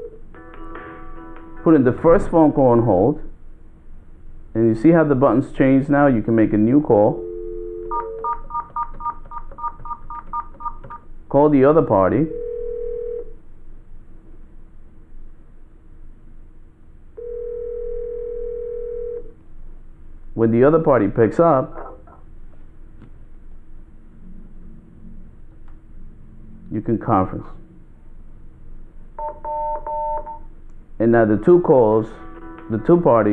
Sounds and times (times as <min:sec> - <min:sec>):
Speech: 0:01.7 - 0:03.3, 0:04.6 - 0:07.2, 0:11.3 - 0:12.3, 0:20.4 - 0:21.8, 0:26.7 - 0:27.6, 0:31.0 - 0:33.3
Telephone: 0:07.2 - 0:11.0, 0:17.2 - 0:19.2, 0:29.2 - 0:30.4.